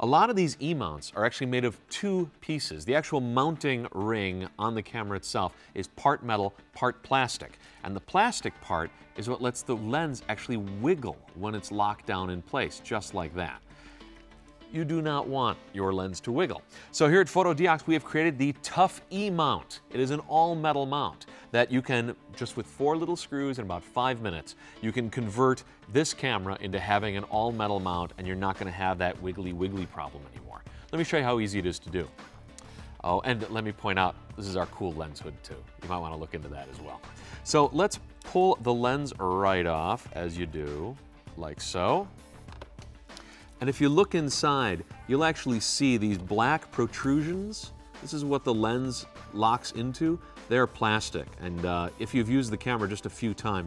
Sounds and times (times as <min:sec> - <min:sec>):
Speech: 0:00.0 - 0:13.6, 0:14.7 - 0:32.1, 0:33.0 - 0:42.1, 0:43.6 - 0:53.6
Music: 0:00.0 - 0:53.6.